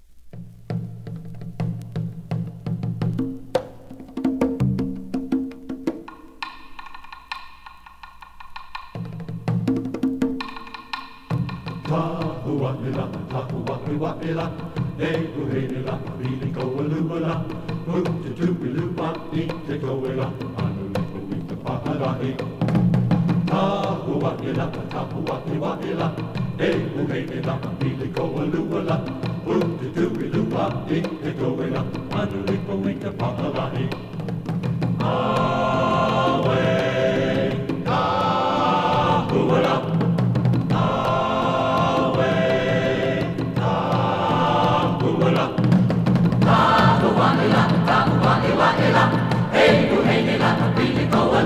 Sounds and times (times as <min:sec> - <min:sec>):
Choir: 0:11.7 - 0:34.3, 0:34.9 - 0:51.4.